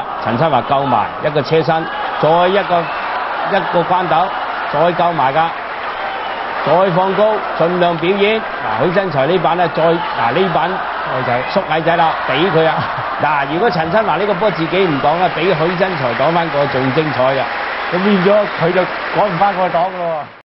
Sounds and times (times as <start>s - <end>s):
Speech: 0.2s - 2.9s, 3.5s - 5.5s, 6.7s - 20.3s.